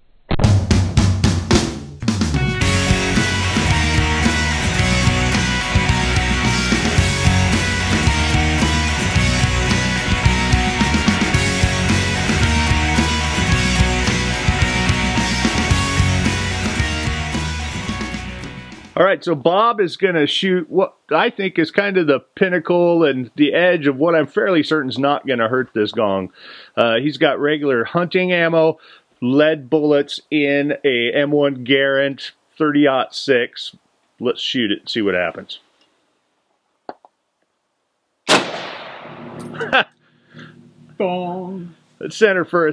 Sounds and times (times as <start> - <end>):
Speech: 19.0 - 35.6, 41.0 - 42.7
Outside, rural or natural: 38.2 - 39.9.